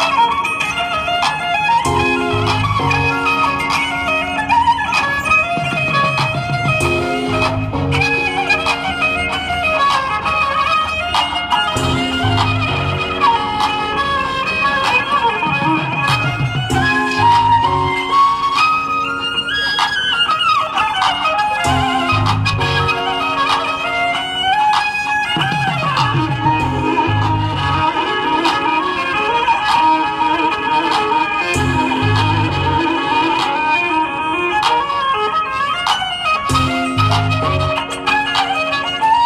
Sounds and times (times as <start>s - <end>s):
Violin, fiddle: 0.0s - 39.2s.